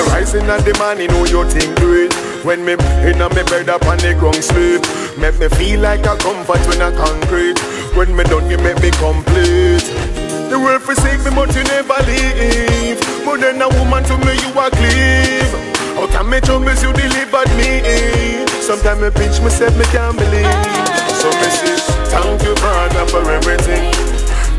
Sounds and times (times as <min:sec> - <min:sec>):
Music of Africa: 0:00.0 - 0:24.5.